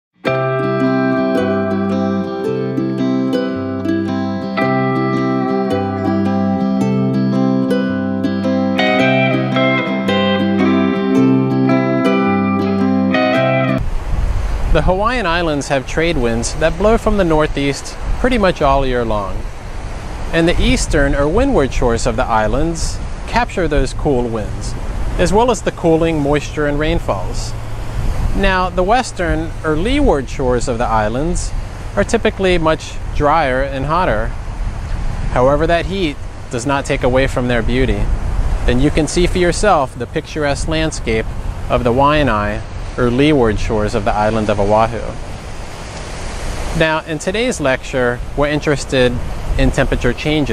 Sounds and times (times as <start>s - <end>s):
Music: 0.2s - 13.8s.